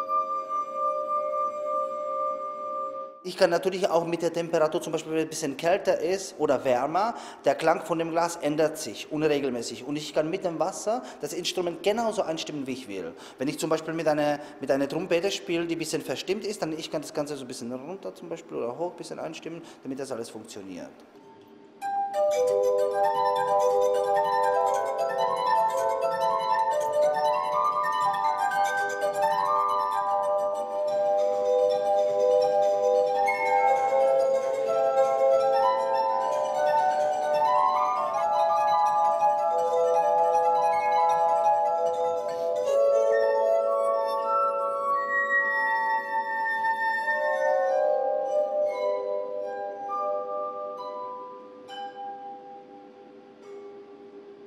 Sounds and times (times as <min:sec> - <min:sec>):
Glass: 0:00.0 - 0:17.2, 0:21.2 - 0:54.4
Music: 0:00.0 - 0:17.8, 0:21.0 - 0:54.4.